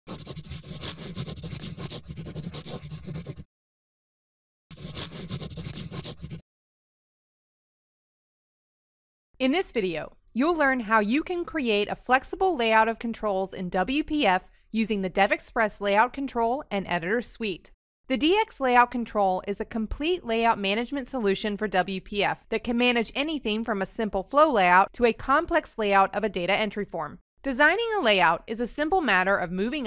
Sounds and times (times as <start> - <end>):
Writing: 0.0 - 3.5, 4.7 - 6.4.